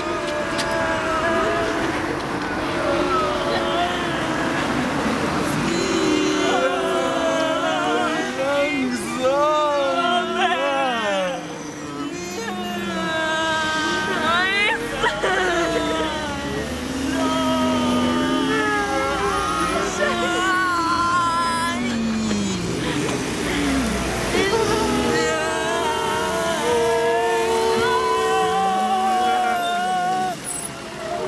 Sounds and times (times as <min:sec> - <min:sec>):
Bus: 0:00.0 - 0:31.2.